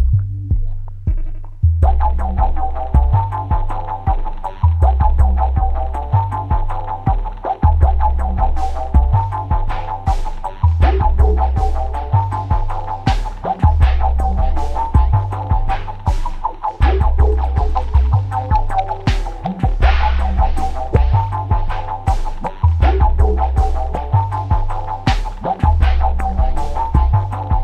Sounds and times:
Music: 0.0 - 27.6.

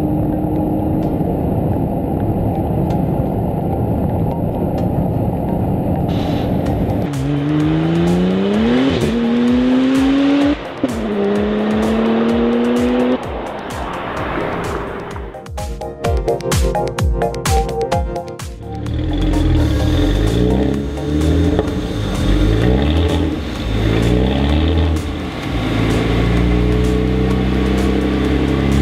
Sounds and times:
Music: 0.0 - 28.8.

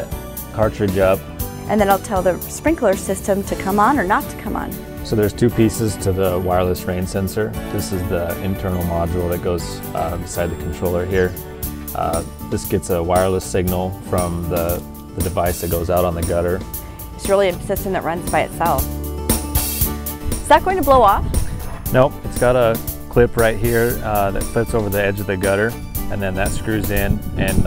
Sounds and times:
Music: 0.0 - 27.6
Speech: 0.6 - 11.3, 12.0 - 16.6, 21.9 - 27.6.

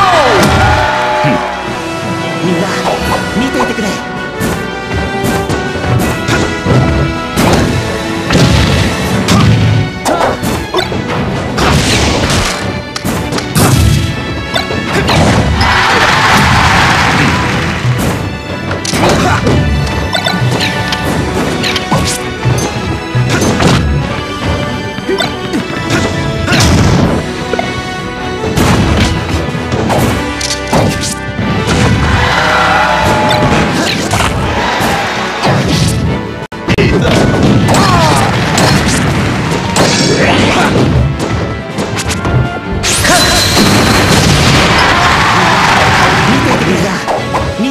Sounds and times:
Music: 0.0 - 47.7.

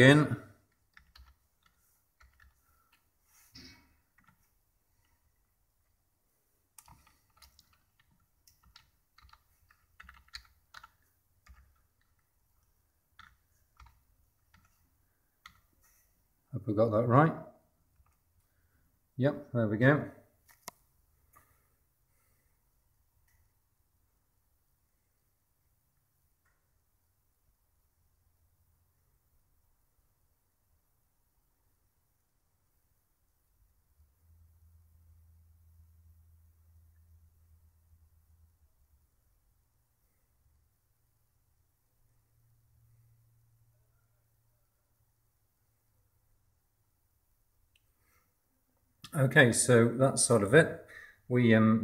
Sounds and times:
Typing: 0.7 - 3.0, 6.8 - 15.8.

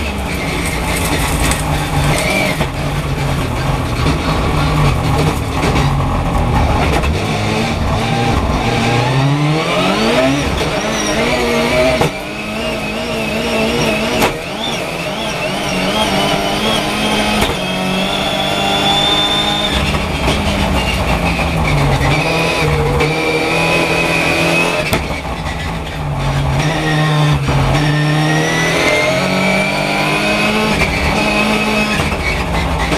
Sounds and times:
Race car, auto racing: 0.0 - 32.9
Tire squeal: 0.0 - 32.9.

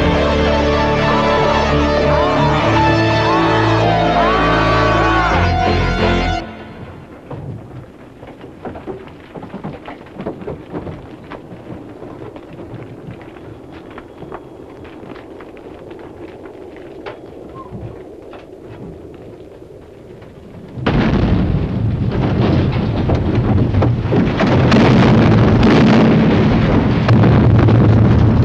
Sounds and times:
Music: 0.0 - 6.9.

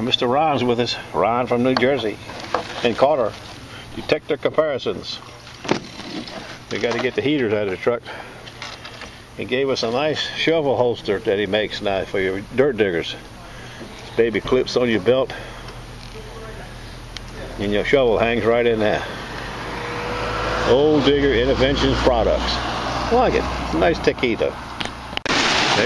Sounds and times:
Speech: 0.0 - 2.2, 2.8 - 3.4, 4.0 - 5.3, 6.7 - 8.1, 9.4 - 15.4, 16.1 - 19.2, 20.7 - 24.6
Outside, urban or manmade: 0.0 - 25.8.

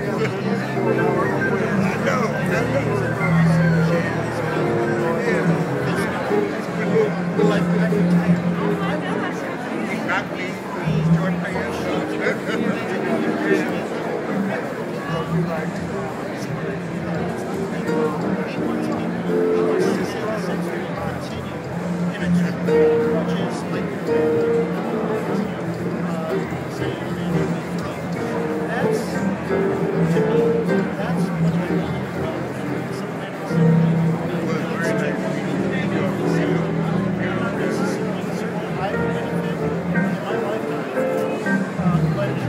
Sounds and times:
Inside, public space: 0.0 - 42.4
Speech: 0.0 - 42.4.

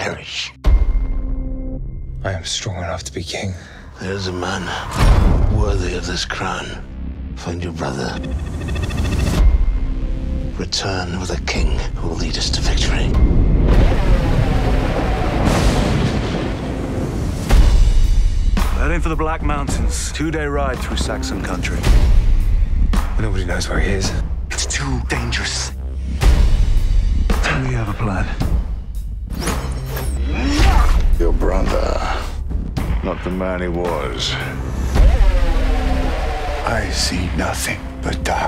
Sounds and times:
Music: 0.0 - 38.4.

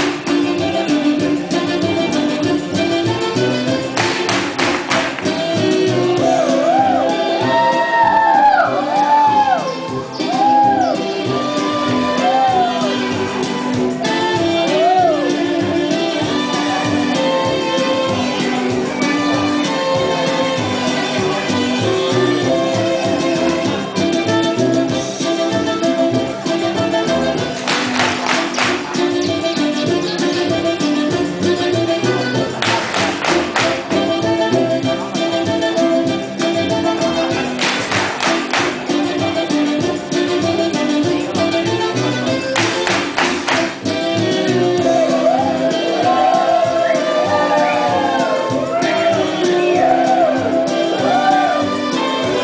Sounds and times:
Music: 0.0 - 52.4.

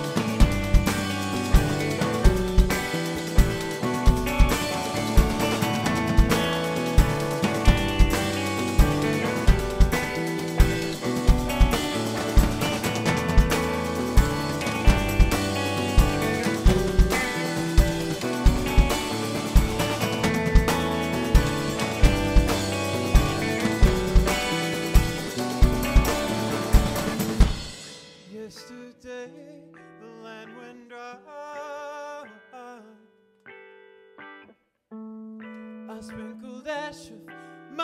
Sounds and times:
Music: 0.0 - 37.8.

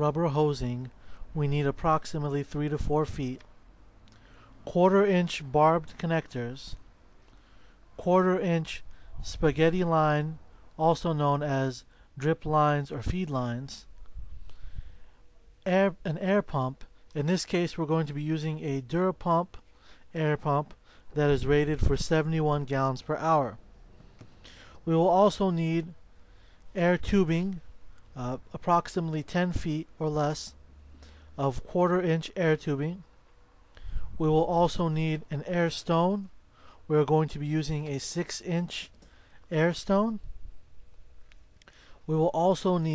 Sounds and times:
Speech: 0.0 - 3.4, 4.6 - 6.8, 8.0 - 13.9, 15.6 - 23.6, 24.8 - 26.0, 26.7 - 30.6, 31.4 - 33.1, 34.2 - 36.3, 36.9 - 38.9, 39.5 - 40.2, 42.1 - 42.9.

